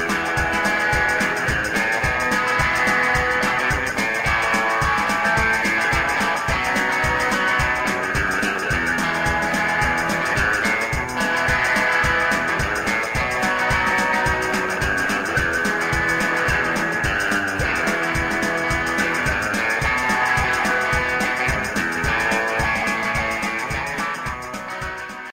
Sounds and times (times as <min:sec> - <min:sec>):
Acoustic guitar: 0:00.0 - 0:25.3
Bass guitar: 0:00.0 - 0:25.3.